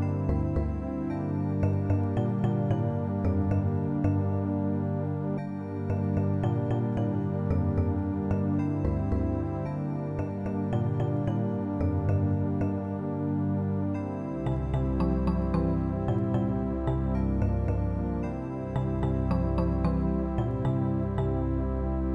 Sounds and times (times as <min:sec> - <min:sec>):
New-age music: 0:00.0 - 0:22.1.